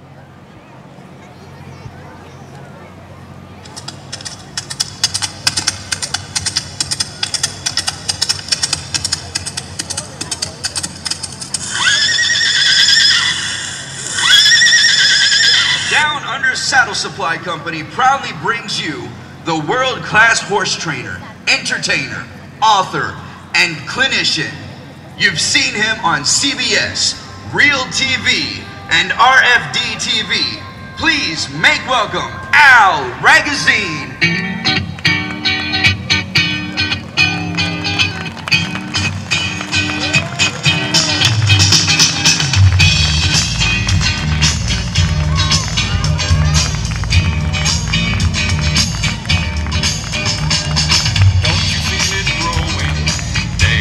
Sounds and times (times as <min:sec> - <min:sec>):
Speech: 0:15.9 - 0:34.2, 0:51.5 - 0:53.0
Music: 0:25.6 - 0:53.8.